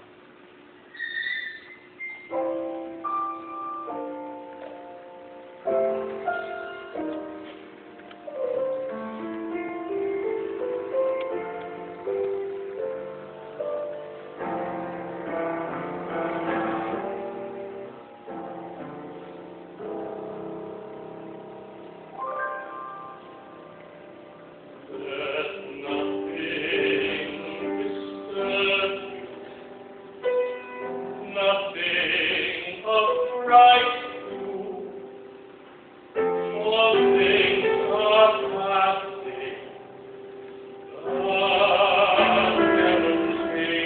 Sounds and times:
Tender music: 0:16.9 - 0:35.5.

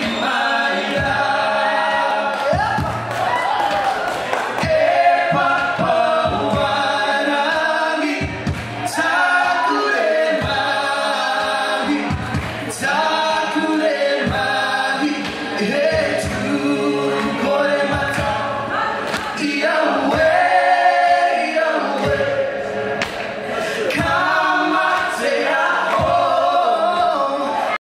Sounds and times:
Music: 0:00.0 - 0:27.8.

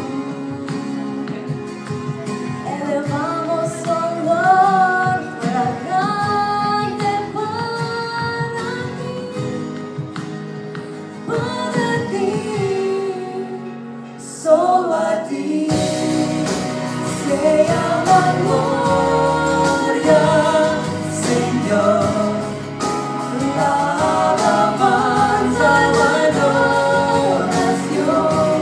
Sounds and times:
Music: 0:00.0 - 0:28.6
Female singing: 0:02.7 - 0:09.7, 0:11.3 - 0:13.7, 0:17.2 - 0:22.5.

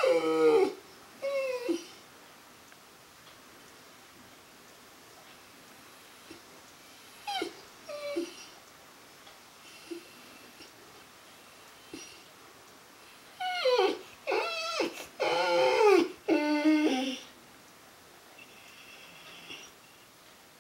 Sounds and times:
Whimper (dog): 0:00.0 - 0:02.0, 0:07.2 - 0:08.6, 0:11.9 - 0:12.3, 0:13.4 - 0:17.3.

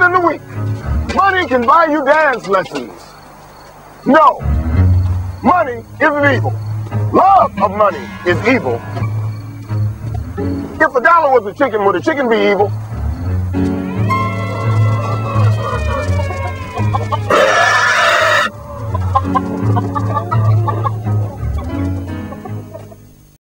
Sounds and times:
Music: 0:00.0 - 0:02.9, 0:04.0 - 0:23.4
Cluck: 0:15.0 - 0:23.1.

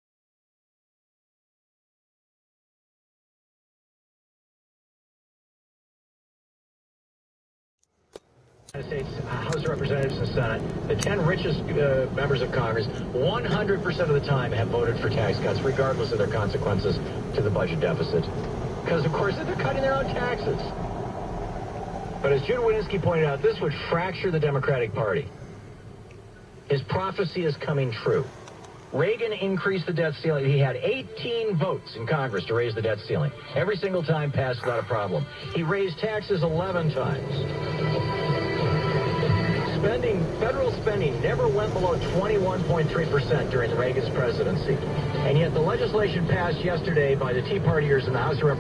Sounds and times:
Car: 0:08.0 - 0:48.6
Speech: 0:08.7 - 0:20.8, 0:22.2 - 0:25.3, 0:26.7 - 0:28.3, 0:28.9 - 0:37.5, 0:39.6 - 0:48.6
Music: 0:30.8 - 0:46.9.

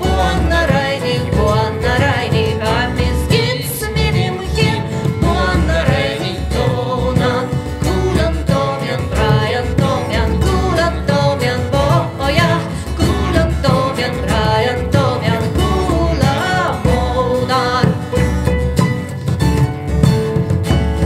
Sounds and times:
Plucked string instrument: 0:00.0 - 0:21.0.

